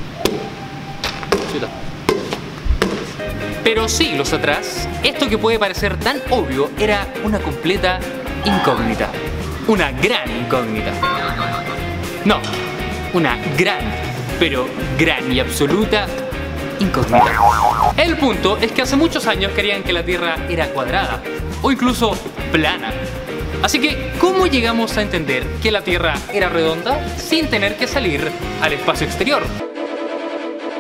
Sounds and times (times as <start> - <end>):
Music: 2.8 - 30.8
Speech: 3.6 - 11.0, 12.3 - 12.5, 13.1 - 16.2, 16.8 - 17.2, 18.0 - 22.9, 23.6 - 29.5.